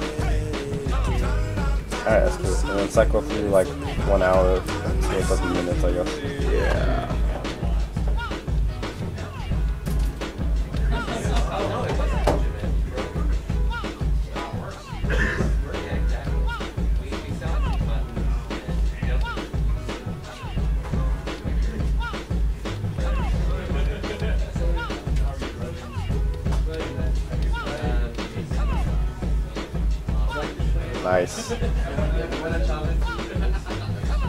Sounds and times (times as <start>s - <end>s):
Music: 0.0s - 34.2s
Speech: 1.9s - 7.6s, 30.2s - 33.4s.